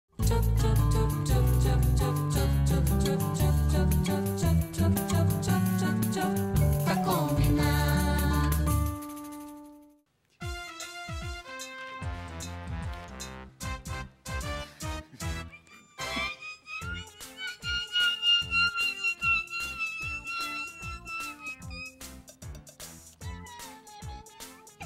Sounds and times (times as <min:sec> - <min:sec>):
Music for children: 0:00.2 - 0:09.5, 0:10.4 - 0:24.8.